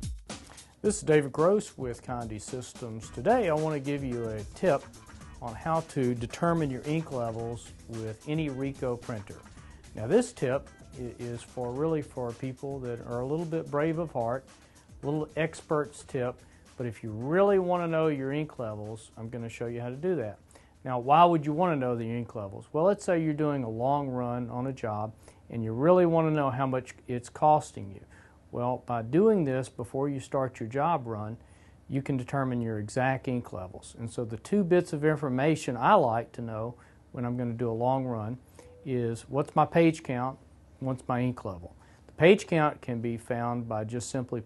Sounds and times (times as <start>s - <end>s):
Speech: 0.8s - 9.4s, 10.0s - 14.4s, 15.0s - 44.4s.